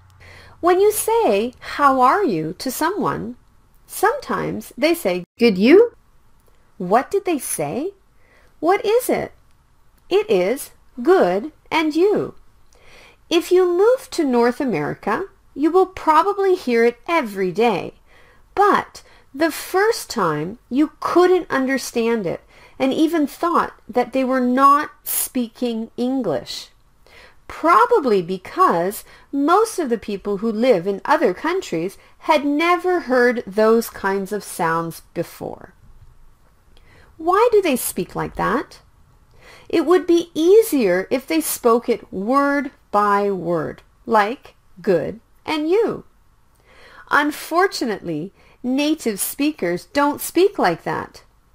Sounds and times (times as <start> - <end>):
Speech: 0.6 - 6.0, 6.8 - 8.0, 8.6 - 9.4, 10.1 - 12.4, 13.3 - 18.0, 18.6 - 26.7, 27.5 - 35.7, 37.2 - 38.8, 39.7 - 46.1, 47.1 - 51.2.